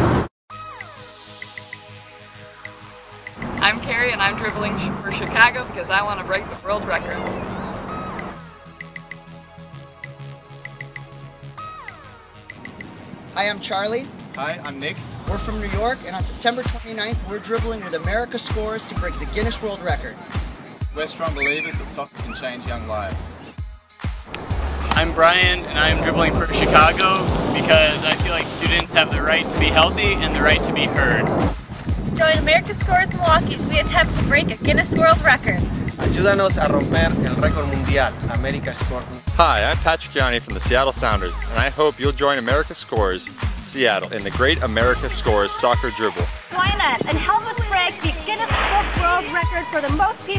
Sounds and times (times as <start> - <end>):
Music: 0.5 - 50.3
Speech: 13.4 - 20.2, 21.0 - 23.3, 24.9 - 31.2, 32.2 - 50.3.